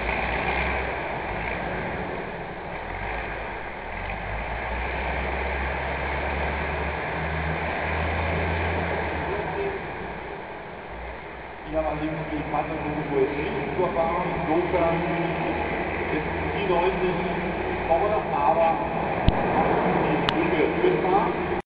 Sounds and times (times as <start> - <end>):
Truck: 0.0 - 21.6
Speech: 9.3 - 9.8, 11.7 - 18.9, 20.1 - 21.6.